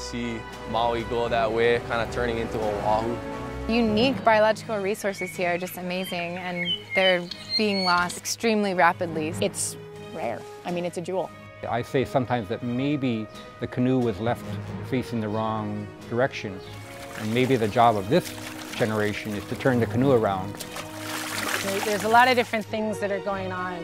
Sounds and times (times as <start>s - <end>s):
Music: 0.0s - 23.8s
Speech: 0.1s - 16.6s, 17.2s - 20.5s.